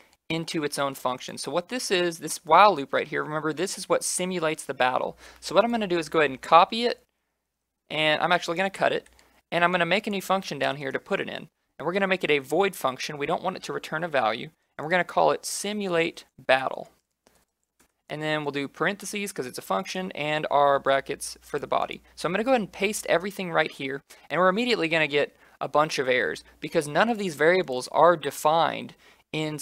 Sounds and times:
Speech: 0:00.3 - 0:07.1, 0:07.9 - 0:17.0, 0:18.1 - 0:29.6.

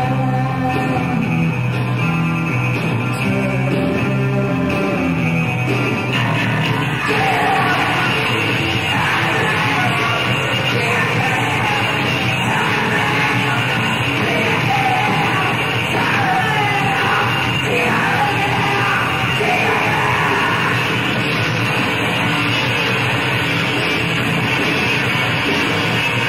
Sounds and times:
Singing: 0:00.0 - 0:01.6, 0:03.0 - 0:21.3
Inside, large room or hall: 0:00.0 - 0:26.2
Inside, public space: 0:00.0 - 0:26.2
Music: 0:00.0 - 0:26.2.

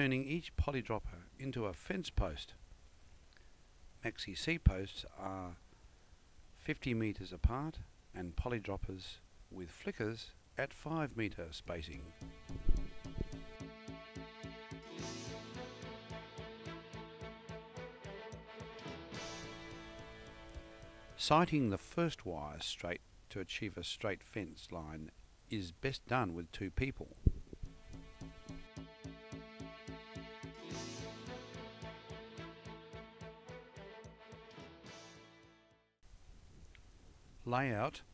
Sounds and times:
Speech: 0:00.0 - 0:02.6, 0:04.0 - 0:05.6, 0:06.6 - 0:12.1, 0:21.2 - 0:27.2, 0:37.4 - 0:38.1
Music: 0:12.0 - 0:21.6, 0:27.6 - 0:36.0.

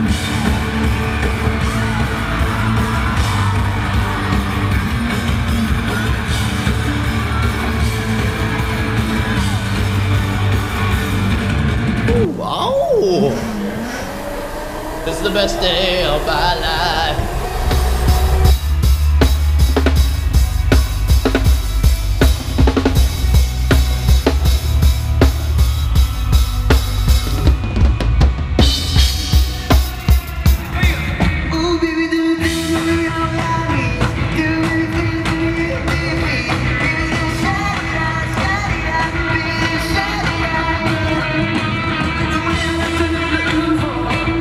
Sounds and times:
Music: 0:00.0 - 0:44.4.

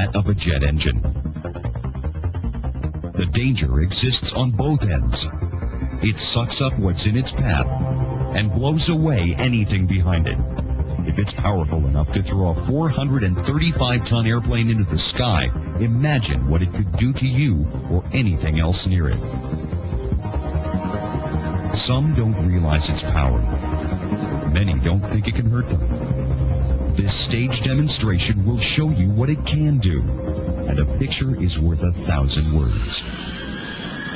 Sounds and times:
Speech: 0:00.0 - 0:01.0, 0:03.2 - 0:05.3, 0:06.0 - 0:07.7, 0:08.3 - 0:10.4, 0:11.1 - 0:19.2, 0:21.7 - 0:23.5, 0:24.5 - 0:25.8, 0:27.0 - 0:30.1, 0:30.7 - 0:33.1.

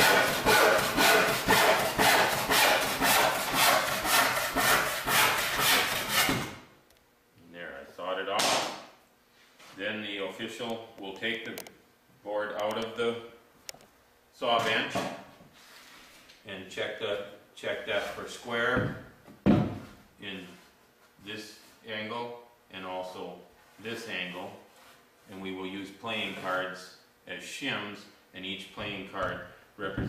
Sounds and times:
Wood: 0:00.0 - 0:06.6
Speech: 0:07.4 - 0:08.6, 0:09.8 - 0:11.6, 0:12.2 - 0:13.4, 0:14.4 - 0:15.2, 0:16.4 - 0:19.0, 0:20.2 - 0:24.7, 0:25.3 - 0:30.0.

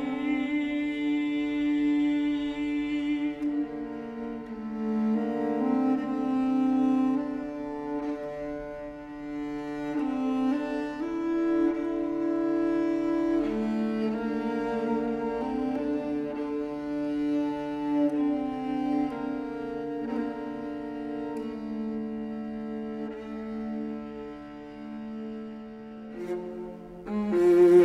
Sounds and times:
String section: 0:00.0 - 0:27.8.

